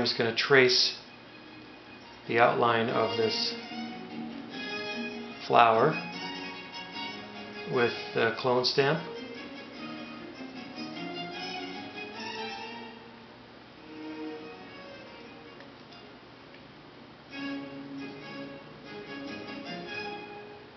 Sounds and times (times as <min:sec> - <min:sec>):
Speech: 0:00.0 - 0:01.0, 0:02.3 - 0:03.6, 0:05.4 - 0:06.0, 0:07.7 - 0:09.1
Music: 0:00.0 - 0:16.4, 0:17.2 - 0:20.7.